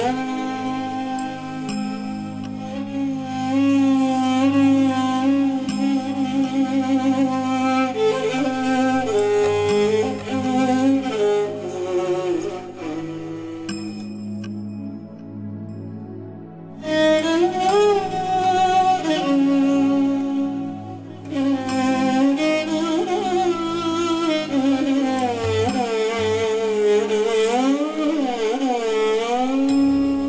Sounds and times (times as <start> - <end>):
Bowed string instrument: 0.0 - 30.2.